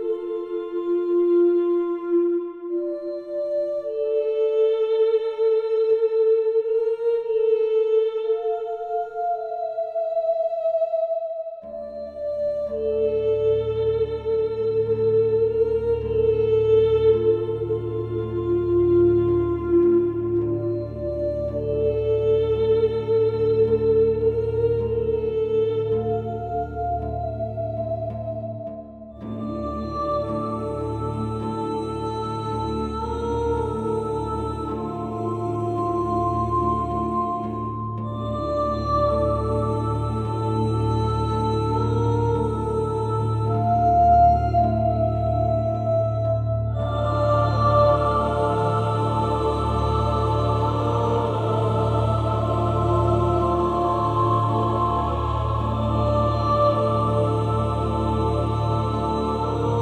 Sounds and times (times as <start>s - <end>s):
Music: 0.0s - 59.8s.